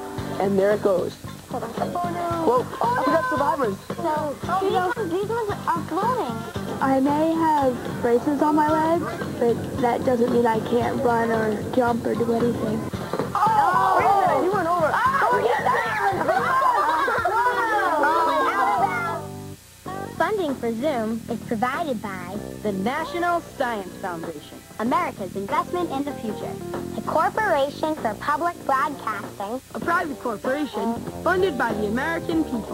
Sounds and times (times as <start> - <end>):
Music: 0.0 - 32.7.